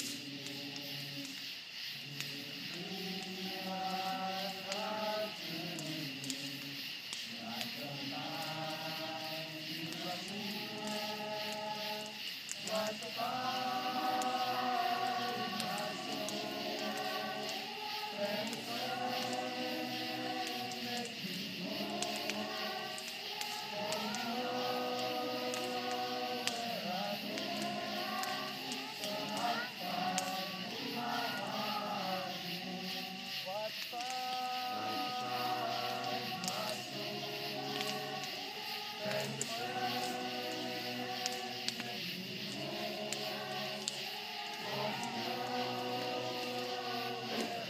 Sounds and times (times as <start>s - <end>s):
Choir: 0.0s - 47.7s
Male singing: 2.1s - 6.8s, 7.4s - 22.7s, 23.7s - 38.4s, 39.0s - 47.7s.